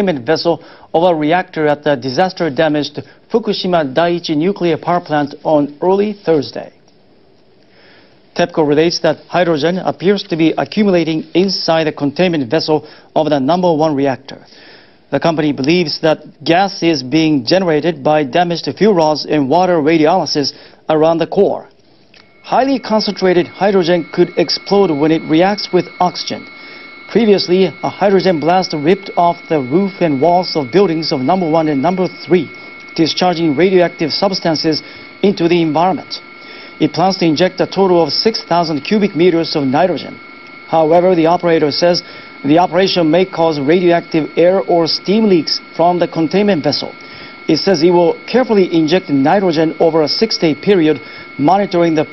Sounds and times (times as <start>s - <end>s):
Speech: 0.0s - 6.8s, 8.4s - 14.5s, 15.1s - 21.7s, 22.5s - 26.5s, 27.1s - 36.2s, 36.8s - 52.1s.